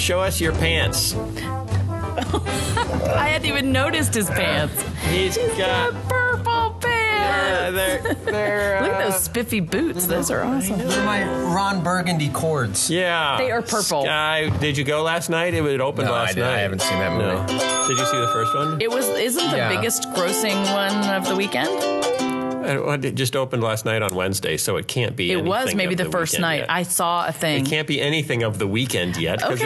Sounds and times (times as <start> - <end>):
Music: 0.0 - 29.6
Speech: 3.0 - 21.6, 22.6 - 29.6.